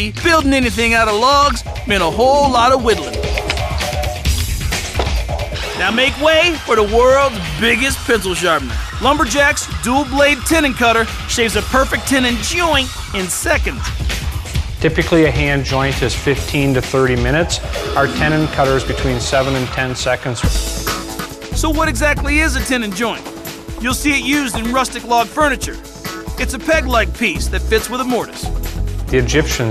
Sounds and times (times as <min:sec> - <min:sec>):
Speech: 0:00.0 - 0:03.2, 0:05.8 - 0:13.9, 0:14.8 - 0:20.5, 0:21.6 - 0:23.2, 0:23.8 - 0:25.8, 0:26.4 - 0:28.5, 0:29.1 - 0:29.7
Music: 0:00.0 - 0:29.7.